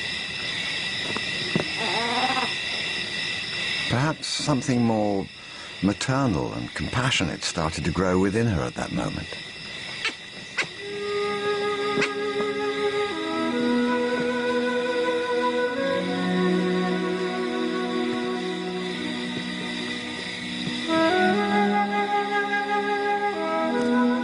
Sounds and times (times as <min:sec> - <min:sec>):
Speech: 0:03.9 - 0:09.4.